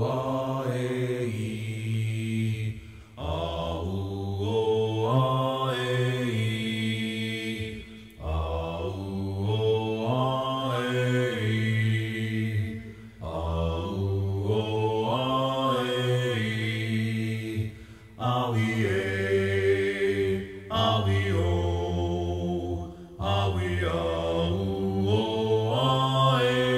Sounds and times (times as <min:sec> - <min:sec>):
Mantra: 0:00.0 - 0:26.7.